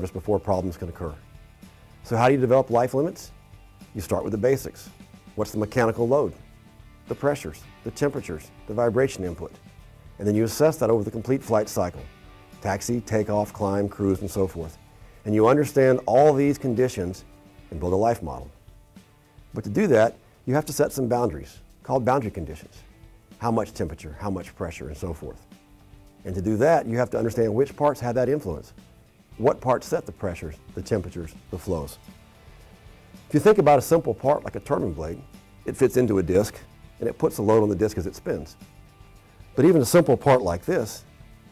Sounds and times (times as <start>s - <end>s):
Speech: 0.0s - 1.2s, 2.0s - 6.4s, 7.1s - 9.6s, 10.2s - 18.6s, 19.6s - 22.8s, 23.4s - 25.5s, 26.2s - 28.8s, 29.4s - 32.0s, 33.3s - 38.6s, 39.6s - 41.1s
Music: 0.0s - 41.5s.